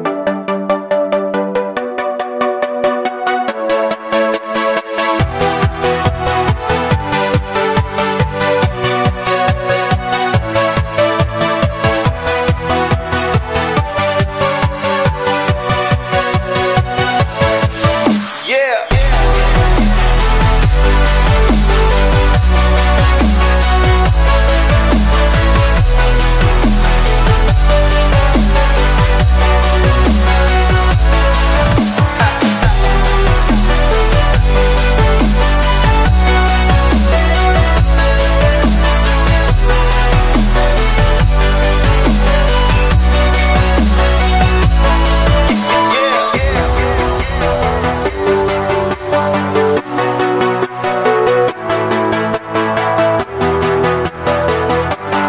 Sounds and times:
Dubstep: 0:05.0 - 0:55.2.

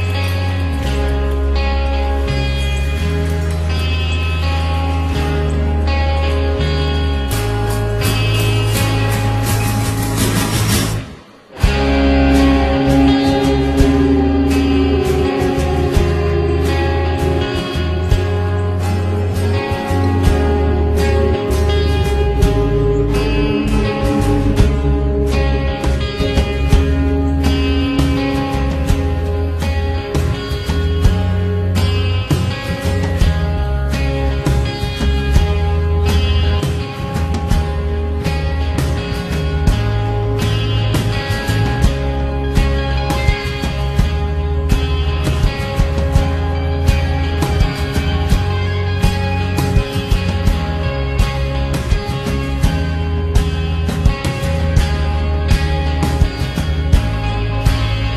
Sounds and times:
Guitar: 0:00.0 - 0:58.1.

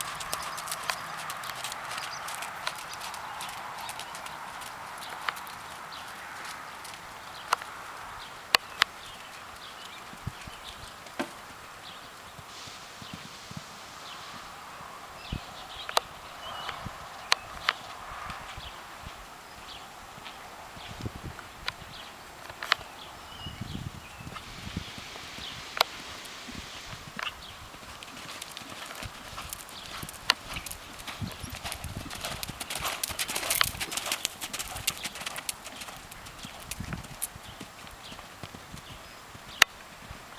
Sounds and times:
Clip-clop: 0:00.0 - 0:40.3.

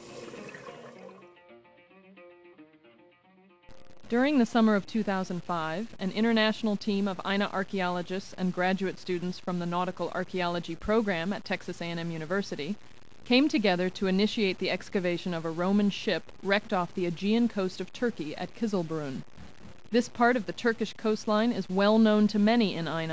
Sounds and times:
Speech: 0:04.1 - 0:19.2, 0:19.9 - 0:23.1.

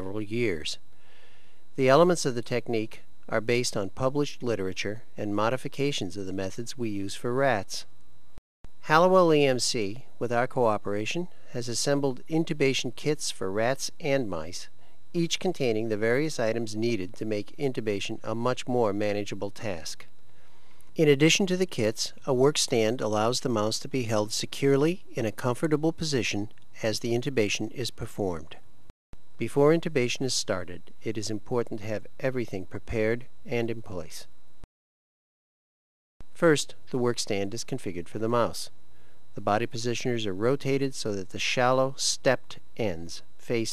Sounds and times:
Speech: 0:00.0 - 0:00.8, 0:01.8 - 0:07.9, 0:08.8 - 0:20.1, 0:21.0 - 0:28.6, 0:29.4 - 0:34.3, 0:36.4 - 0:38.7, 0:39.4 - 0:43.7.

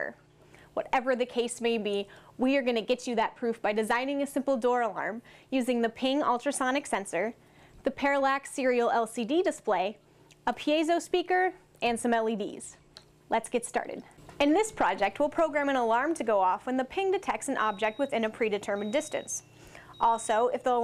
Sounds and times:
Speech: 0:00.0 - 0:00.2, 0:00.8 - 0:19.4, 0:20.0 - 0:20.8.

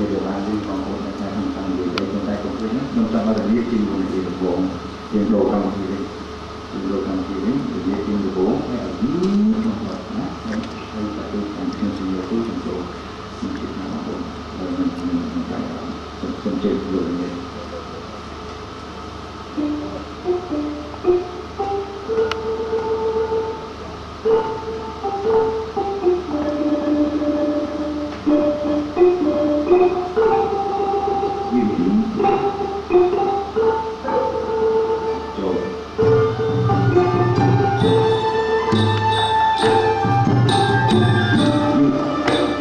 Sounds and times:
Music: 0:19.5 - 0:42.6.

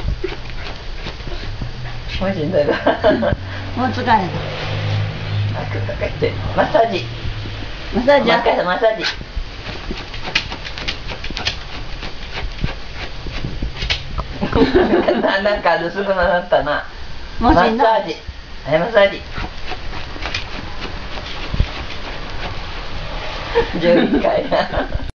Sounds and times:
Speech: 0:08.0 - 0:09.2, 0:15.3 - 0:19.3, 0:23.8 - 0:24.5.

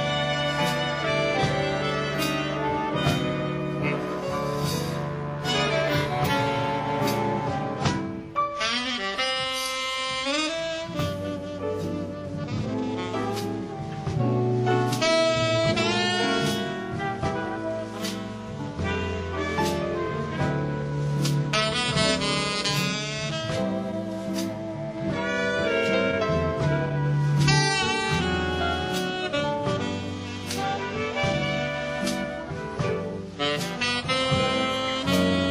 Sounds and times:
Music: 0:00.0 - 0:35.5.

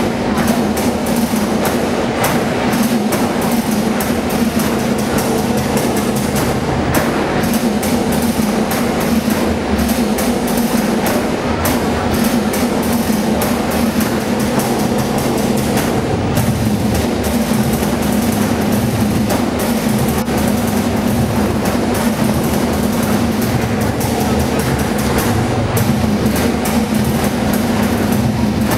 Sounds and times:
Music: 0:00.0 - 0:28.7.

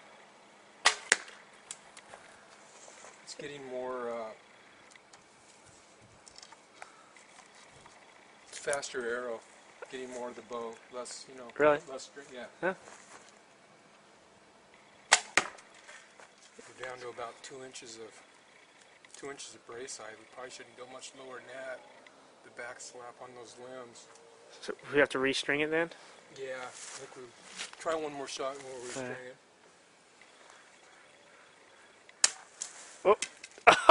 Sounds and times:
Outside, rural or natural: 0:00.0 - 0:33.9.

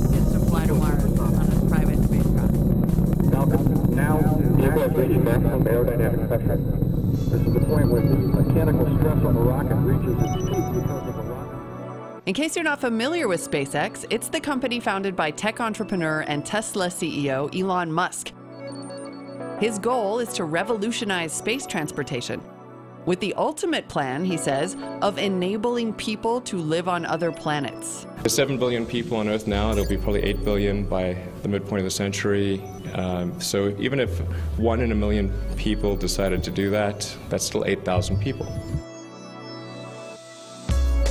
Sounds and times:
Music: 0:00.0 - 0:41.1
Speech: 0:00.1 - 0:02.5, 0:03.3 - 0:06.6, 0:07.4 - 0:10.2, 0:12.3 - 0:18.3, 0:23.1 - 0:38.6.

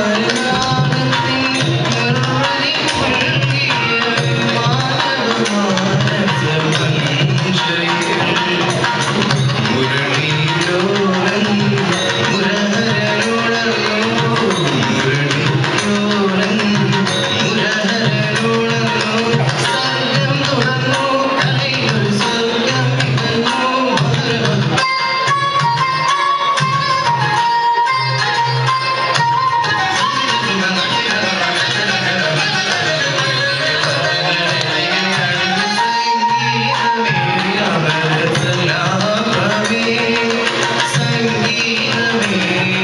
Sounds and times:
Male singing: 0:00.0 - 0:24.9, 0:30.0 - 0:42.8
Music: 0:00.0 - 0:42.8.

